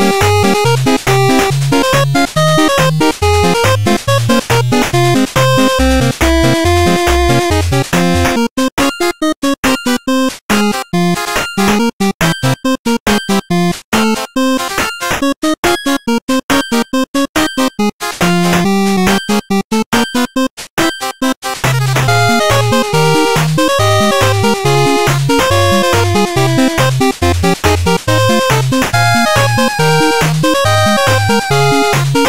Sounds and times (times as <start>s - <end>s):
Music: 0.0s - 32.2s.